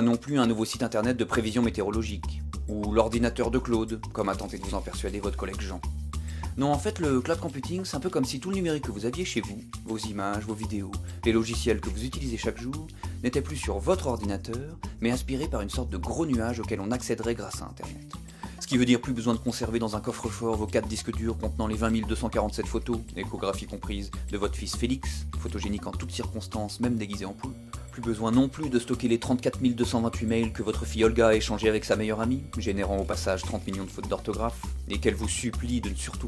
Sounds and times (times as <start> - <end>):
Speech: 0.0 - 5.9, 6.5 - 36.2
Music: 0.0 - 36.2.